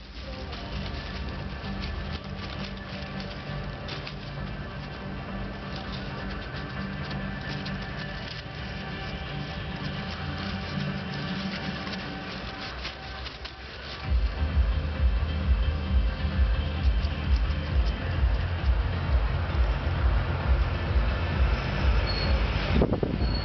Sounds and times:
Music: 0:00.0 - 0:23.4.

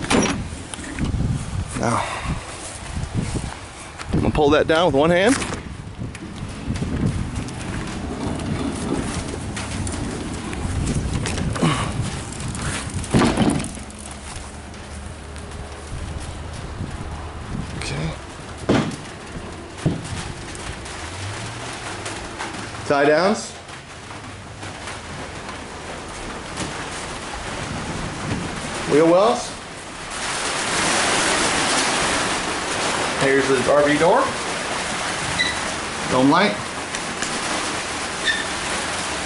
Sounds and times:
Speech: 0:04.2 - 0:05.4, 0:17.8 - 0:18.2, 0:22.9 - 0:23.6, 0:28.9 - 0:29.6, 0:33.2 - 0:34.4, 0:36.0 - 0:36.7.

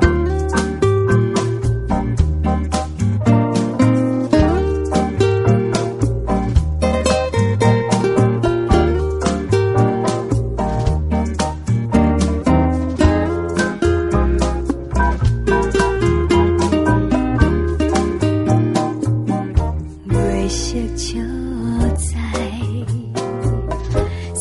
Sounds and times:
Music: 0:00.0 - 0:24.4.

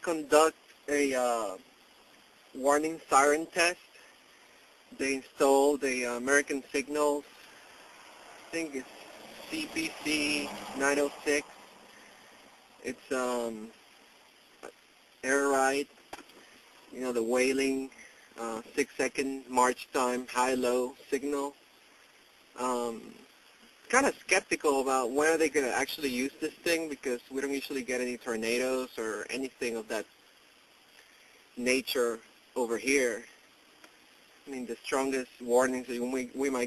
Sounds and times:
Speech: 0:00.0 - 0:01.6, 0:02.5 - 0:03.9, 0:04.9 - 0:07.3, 0:08.5 - 0:08.8, 0:09.4 - 0:11.5, 0:12.8 - 0:13.7, 0:15.2 - 0:15.9, 0:16.9 - 0:21.6, 0:22.6 - 0:23.3, 0:23.9 - 0:30.0, 0:31.6 - 0:33.4, 0:34.5 - 0:36.6.

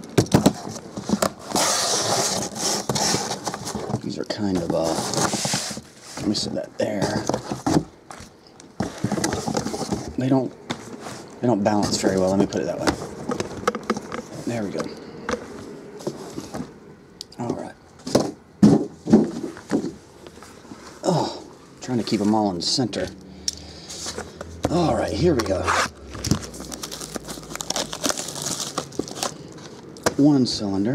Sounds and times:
Speech: 0:04.0 - 0:05.0, 0:06.2 - 0:07.3, 0:10.2 - 0:10.6, 0:11.4 - 0:13.0, 0:14.5 - 0:14.9, 0:17.3 - 0:17.8, 0:21.1 - 0:23.2, 0:24.7 - 0:25.8, 0:30.1 - 0:30.9.

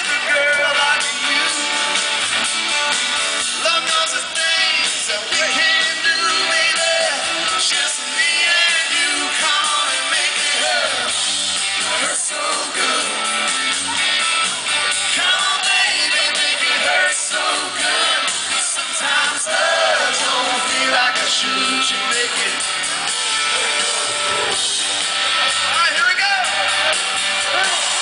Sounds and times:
Music: 0:00.0 - 0:28.0.

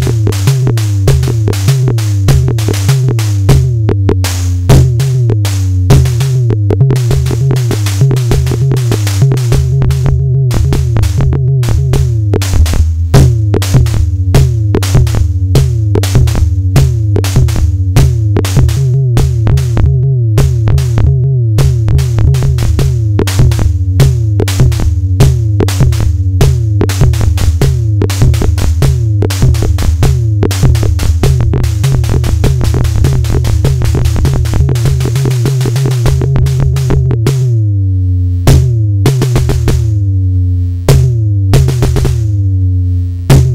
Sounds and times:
Music: 0:00.0 - 0:43.5.

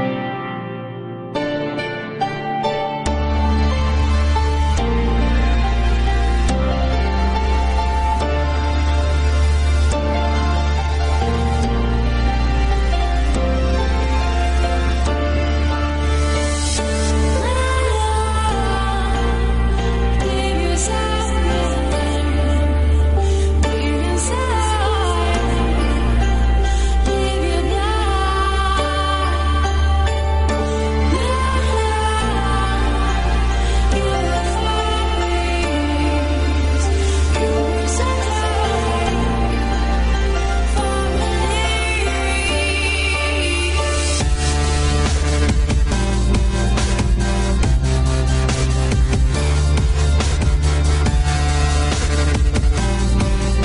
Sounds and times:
Music: 0:00.0 - 0:53.6.

